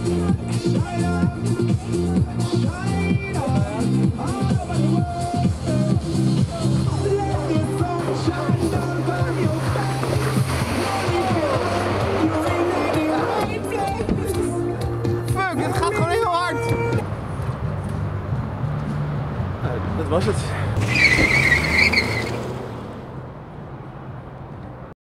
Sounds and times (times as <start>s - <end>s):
Speech: 15.3s - 17.0s, 19.6s - 20.7s.